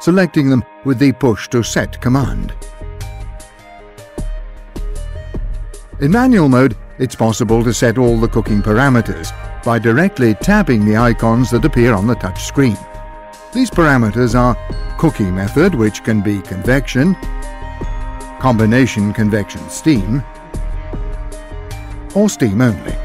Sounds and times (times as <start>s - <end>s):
Speech: 0.0s - 2.6s, 6.0s - 12.8s, 13.6s - 17.2s, 18.4s - 20.2s, 22.2s - 23.0s
Music: 0.0s - 23.0s.